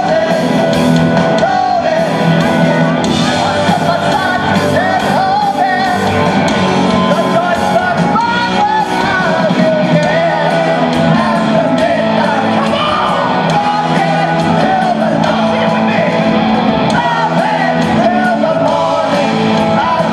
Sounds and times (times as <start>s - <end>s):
Inside, large room or hall: 0.0s - 20.1s
Music: 0.0s - 20.1s
Singing: 0.0s - 20.1s
Shout: 12.5s - 15.1s.